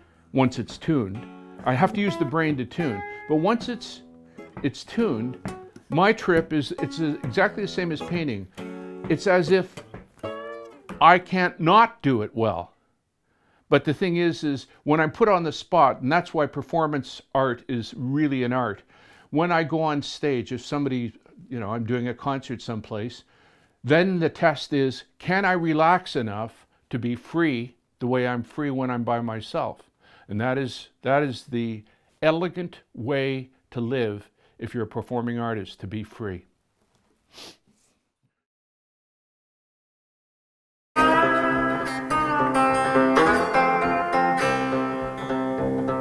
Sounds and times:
Guitar: 0.0 - 12.2, 41.0 - 46.0
Speech: 0.3 - 4.0, 4.6 - 8.5, 9.1 - 9.8, 11.0 - 12.7, 13.7 - 36.5.

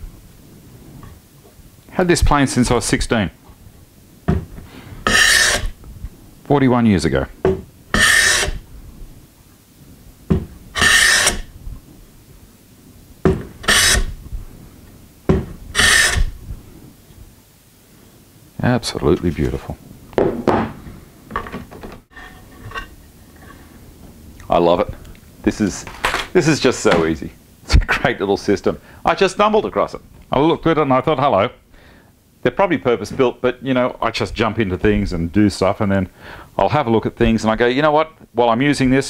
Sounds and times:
Speech: 1.9 - 3.4, 6.5 - 7.4, 18.6 - 19.8, 24.4 - 31.6, 32.4 - 39.0
Tools: 5.1 - 5.7, 8.0 - 8.6, 10.8 - 11.5, 15.8 - 16.3.

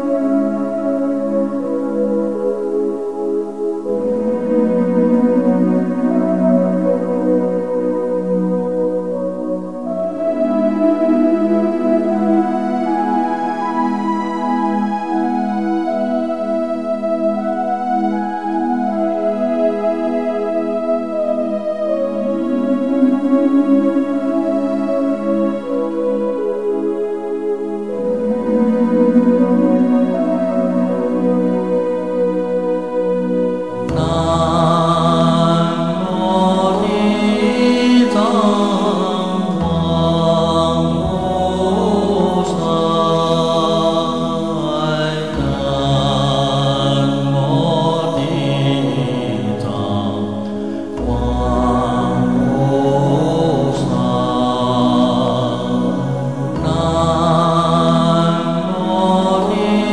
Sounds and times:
Music: 0.0 - 59.9.

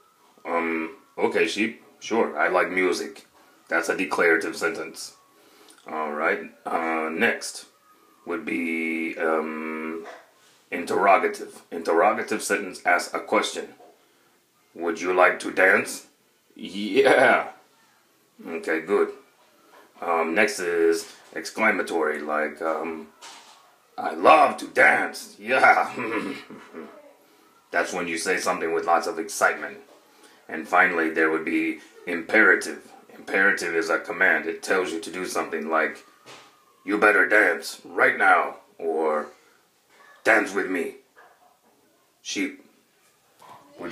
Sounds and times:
Speech: 0.4 - 5.2, 5.8 - 13.8, 14.7 - 17.6, 18.4 - 19.2, 20.0 - 23.1, 24.0 - 29.9, 30.5 - 36.1, 36.8 - 39.4, 40.1 - 41.0, 42.2 - 42.7, 43.5 - 43.9.

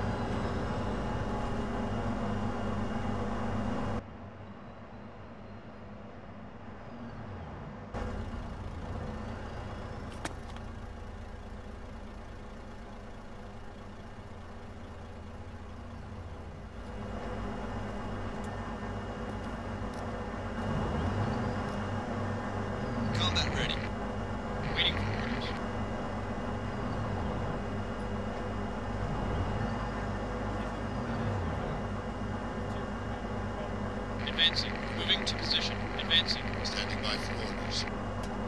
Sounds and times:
Speech: 23.2 - 23.9, 33.5 - 37.9.

